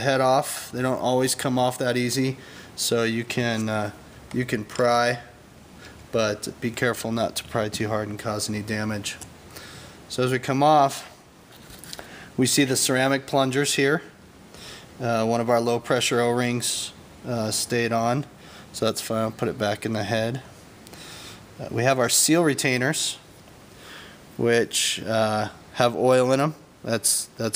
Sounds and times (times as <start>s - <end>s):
Speech: 0.0s - 5.4s, 6.1s - 9.3s, 10.1s - 11.2s, 12.4s - 14.2s, 15.0s - 20.5s, 21.6s - 23.2s, 24.4s - 27.5s.